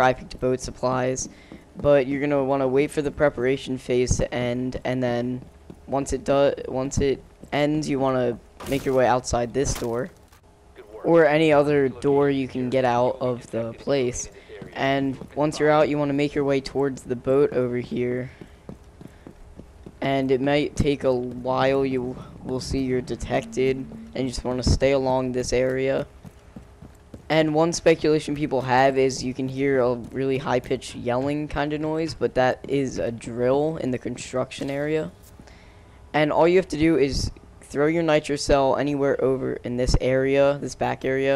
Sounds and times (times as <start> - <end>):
Speech: 0.0 - 10.1, 10.8 - 18.4, 20.0 - 26.1, 27.3 - 35.2, 36.2 - 41.3.